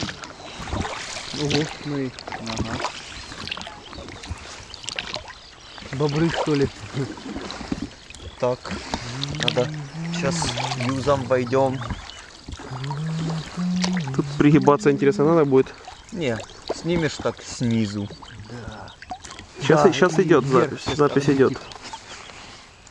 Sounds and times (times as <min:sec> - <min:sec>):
Boat, Water vehicle: 0:00.0 - 0:22.9.